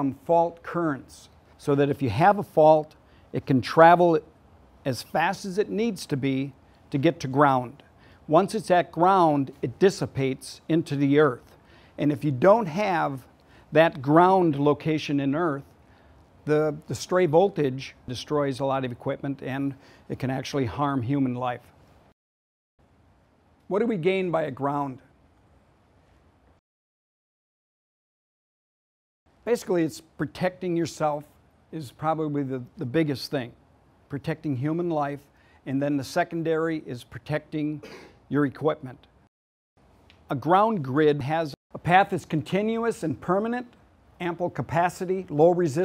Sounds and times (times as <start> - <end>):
Speech: 0.0 - 4.3, 4.9 - 15.7, 16.4 - 21.7, 23.7 - 25.1, 29.5 - 39.1, 40.3 - 45.8.